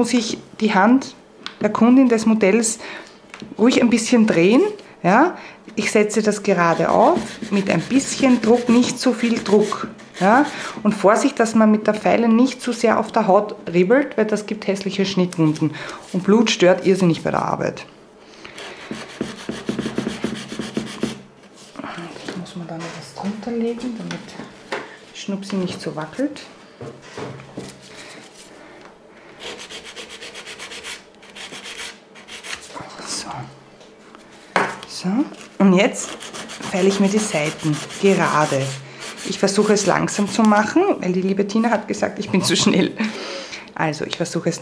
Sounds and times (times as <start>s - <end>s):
Rub: 6.6s - 10.7s, 18.6s - 21.8s, 29.4s - 32.8s, 36.0s - 40.7s.